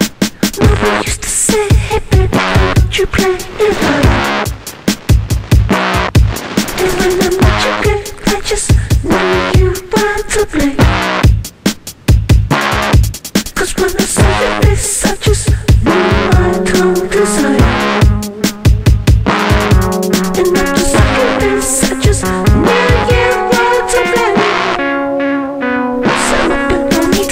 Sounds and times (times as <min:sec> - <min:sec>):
Sampler: 0:03.6 - 0:08.2, 0:15.8 - 0:26.4.